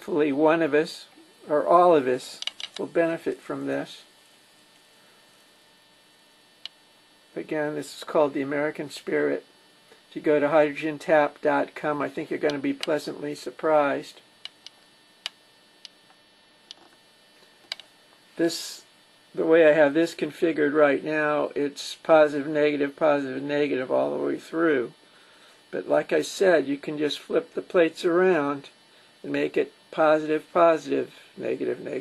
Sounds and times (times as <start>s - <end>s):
Speech: 0.0s - 4.1s, 7.3s - 9.5s, 10.1s - 14.3s, 18.4s - 25.0s, 25.7s - 32.0s.